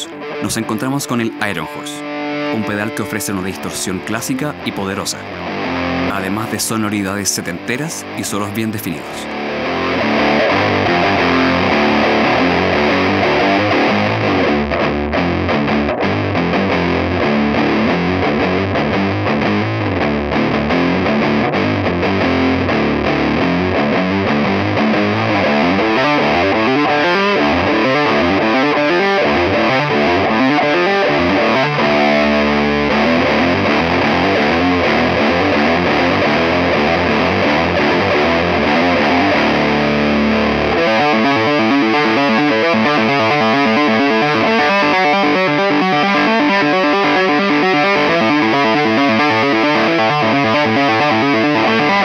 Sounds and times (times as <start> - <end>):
Speech: 0.0 - 2.0, 2.6 - 5.3, 6.1 - 9.3
Music: 0.0 - 52.0.